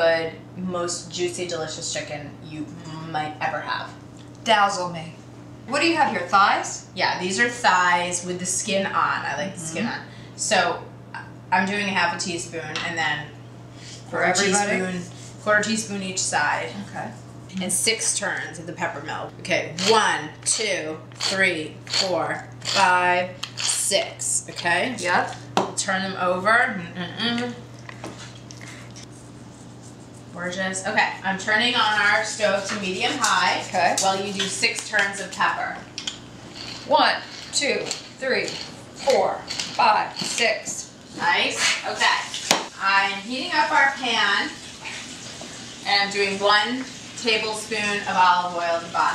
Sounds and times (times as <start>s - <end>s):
Speech: 0.0s - 10.8s, 14.1s - 27.6s, 30.4s - 35.8s, 36.9s - 44.6s, 45.9s - 49.1s.